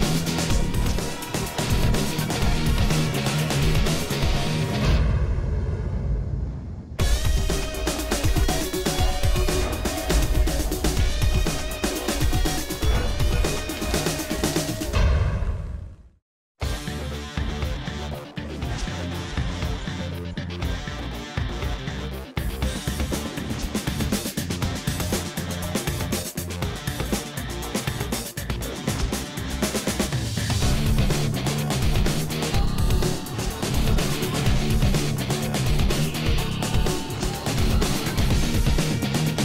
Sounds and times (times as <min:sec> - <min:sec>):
Music: 0:00.0 - 0:06.0, 0:07.0 - 0:15.5, 0:16.6 - 0:39.4.